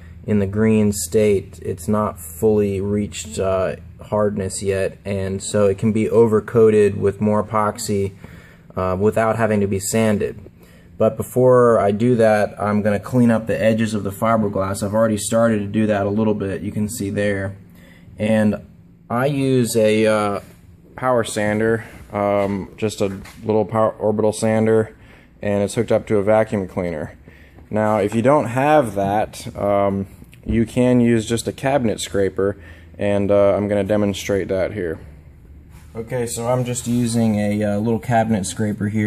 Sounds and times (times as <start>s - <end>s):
Speech: 0.3s - 8.2s, 8.8s - 17.6s, 18.2s - 35.1s, 35.9s - 39.0s.